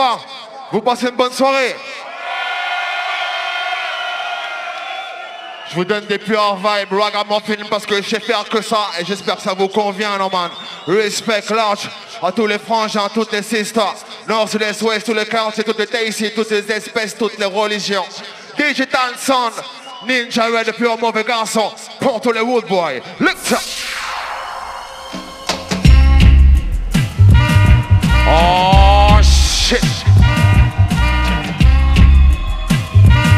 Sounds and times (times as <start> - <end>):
Speech: 0.0 - 2.0, 5.7 - 23.6, 28.3 - 30.0
Music: 24.8 - 33.3.